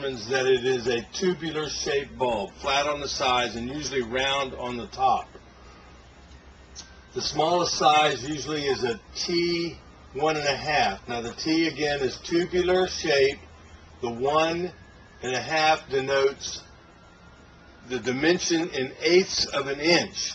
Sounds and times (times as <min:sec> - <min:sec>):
Speech: 0:00.0 - 0:05.4, 0:07.2 - 0:13.4, 0:14.0 - 0:16.7, 0:17.9 - 0:20.3.